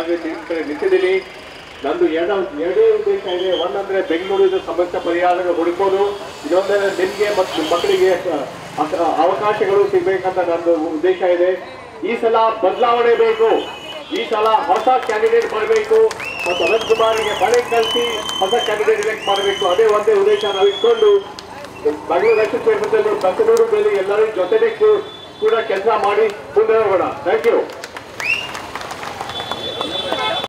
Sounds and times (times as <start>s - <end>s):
Male speech, man speaking: 0.0s - 27.7s, 30.0s - 30.4s
Narration, monologue: 0.0s - 27.8s.